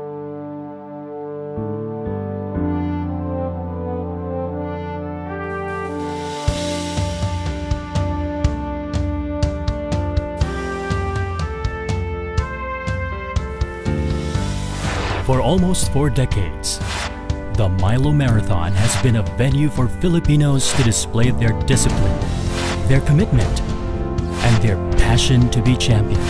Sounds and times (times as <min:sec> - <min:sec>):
Music: 0:00.0 - 0:26.2
Speech: 0:15.2 - 0:16.8, 0:17.5 - 0:22.2, 0:22.8 - 0:23.6, 0:24.4 - 0:26.2.